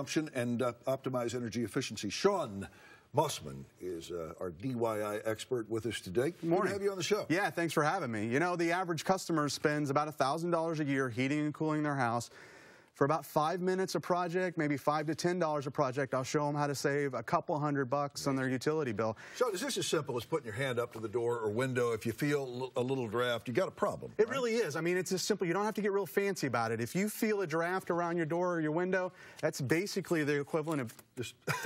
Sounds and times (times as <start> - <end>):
Speech: 0.0 - 12.3, 13.0 - 31.5.